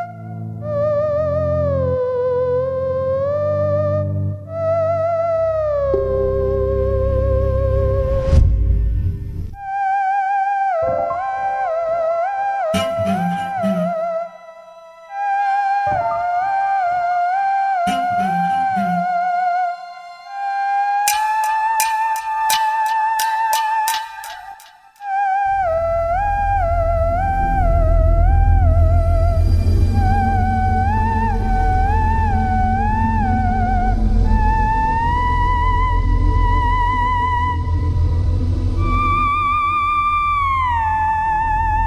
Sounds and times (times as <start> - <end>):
Theremin: 0.0 - 8.4, 9.6 - 41.8.